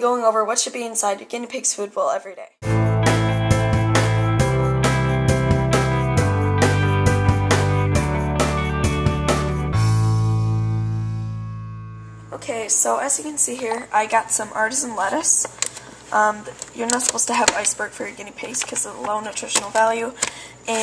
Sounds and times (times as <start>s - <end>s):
Speech: 0.0s - 2.6s, 12.3s - 15.5s, 16.1s - 20.8s
Music: 2.6s - 12.4s.